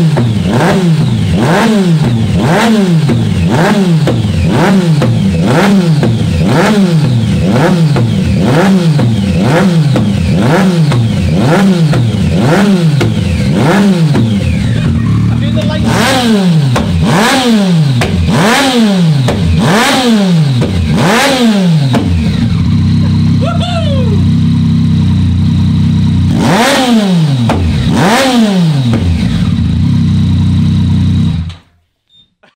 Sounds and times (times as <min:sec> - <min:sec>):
Accelerating, revving, vroom: 0:00.0 - 0:14.4, 0:15.8 - 0:22.5, 0:26.3 - 0:29.6
Vehicle: 0:00.0 - 0:31.7.